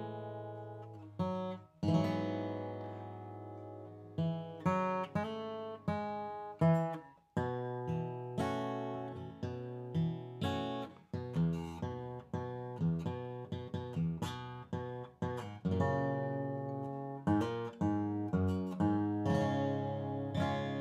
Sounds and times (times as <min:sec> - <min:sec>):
Acoustic guitar: 0:00.0 - 0:20.8.